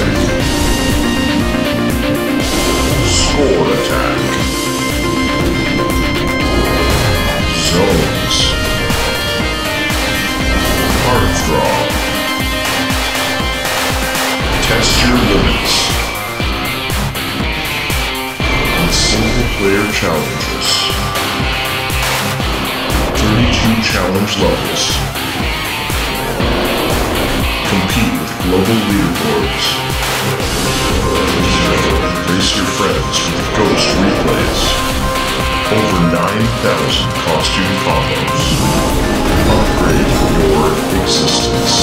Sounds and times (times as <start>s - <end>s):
Music: 0.0s - 41.8s
Speech: 3.0s - 4.5s, 7.5s - 8.6s, 11.0s - 12.1s, 14.6s - 16.2s, 18.7s - 21.1s, 23.2s - 25.1s, 27.6s - 29.9s, 31.2s - 34.8s, 35.6s - 38.6s, 39.3s - 41.8s.